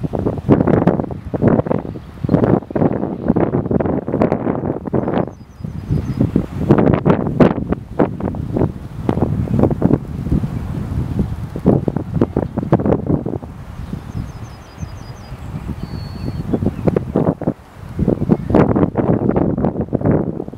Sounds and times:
Rustling leaves: 0.0s - 20.5s
Wind noise (microphone): 0.0s - 20.5s.

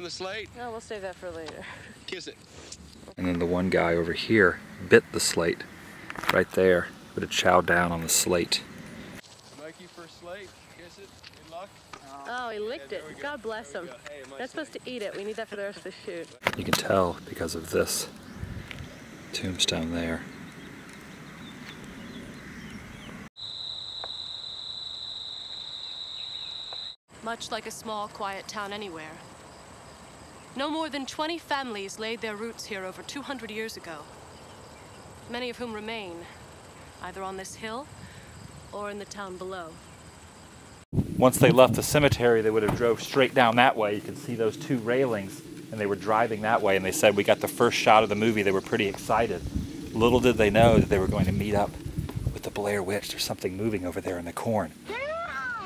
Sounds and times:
Environmental noise: 0.0s - 24.4s, 25.2s - 55.6s.

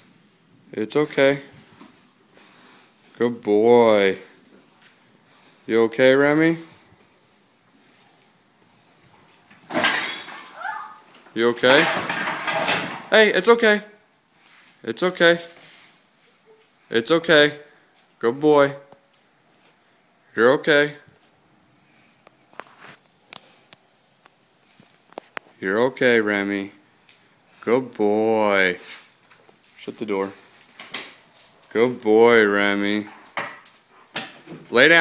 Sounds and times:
Speech: 0.7s - 1.6s, 20.4s - 21.1s.

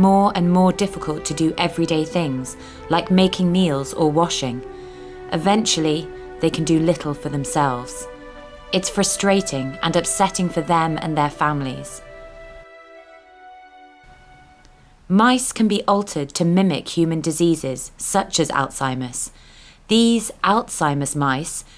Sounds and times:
Speech: 0.0s - 4.6s, 5.3s - 8.1s, 8.8s - 12.0s, 15.1s - 19.3s, 19.9s - 21.7s
Music: 0.0s - 15.0s.

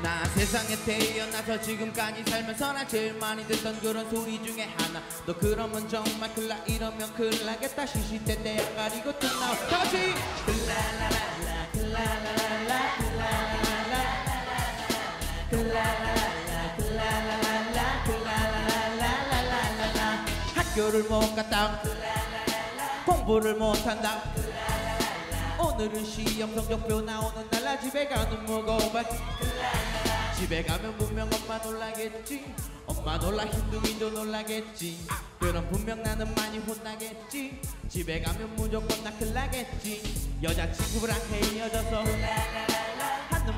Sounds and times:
Funk: 8.0s - 43.5s.

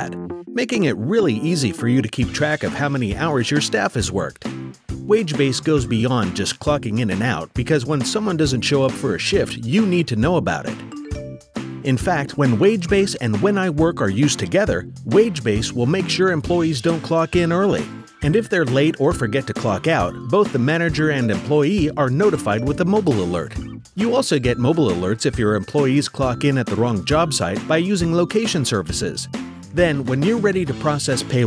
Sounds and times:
Speech: 0.0s - 4.5s, 5.1s - 10.8s, 11.8s - 31.4s
Music: 0.0s - 31.4s.

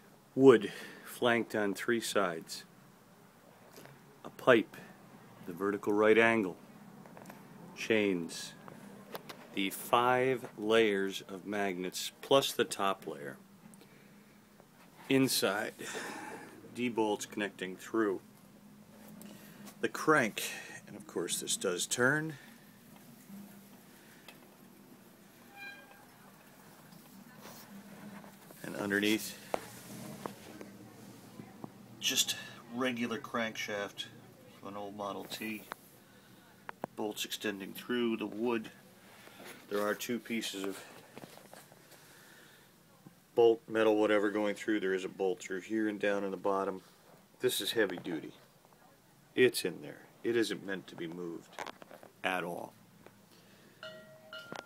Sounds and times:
Speech: 0.4s - 2.7s, 4.2s - 6.6s, 7.8s - 8.6s, 9.6s - 13.4s, 15.1s - 15.8s, 16.8s - 18.2s, 19.8s - 22.4s, 28.6s - 29.6s, 30.5s - 35.7s, 37.0s - 38.8s, 39.7s - 40.9s, 43.4s - 51.5s, 52.2s - 52.8s.

